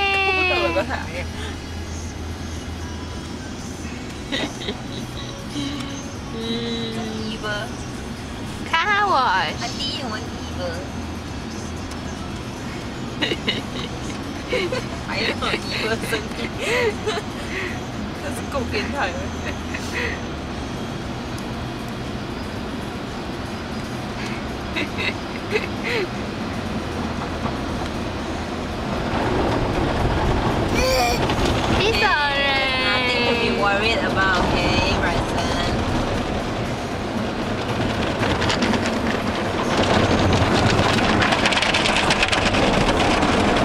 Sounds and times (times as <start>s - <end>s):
Car: 0.0s - 43.6s.